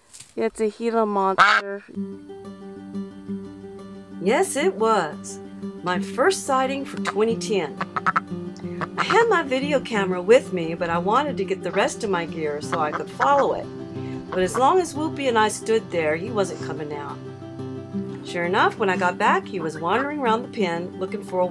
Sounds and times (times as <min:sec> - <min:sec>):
Speech: 0:00.4 - 0:01.9, 0:04.2 - 0:07.7, 0:09.0 - 0:13.6, 0:14.4 - 0:17.2, 0:18.3 - 0:21.5
Music: 0:01.5 - 0:21.5.